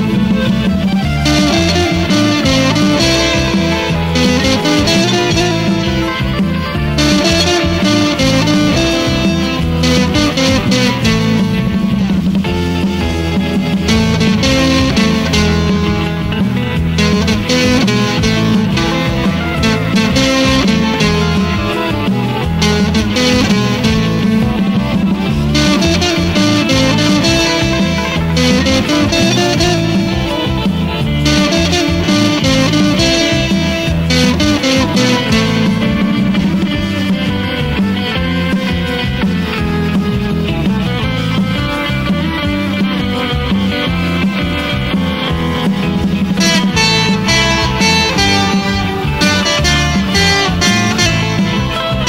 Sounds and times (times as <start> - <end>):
Electric guitar: 0.0 - 52.0.